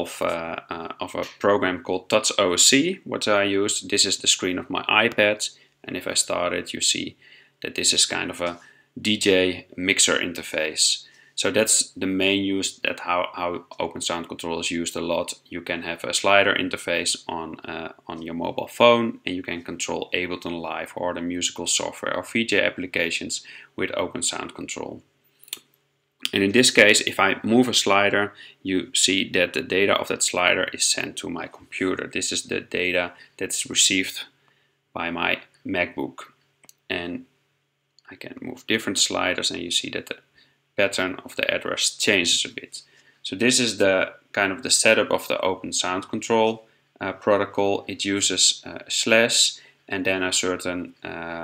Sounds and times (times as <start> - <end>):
Speech: 0.0 - 25.6, 26.2 - 34.4, 35.0 - 37.3, 38.0 - 51.4.